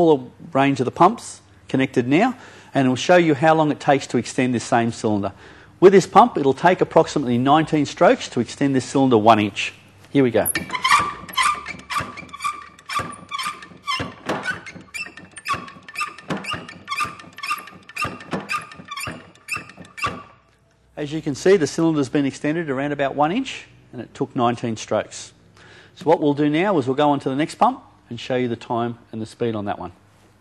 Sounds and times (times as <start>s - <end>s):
Speech: 0.0s - 10.6s, 21.0s - 25.4s, 26.0s - 30.0s.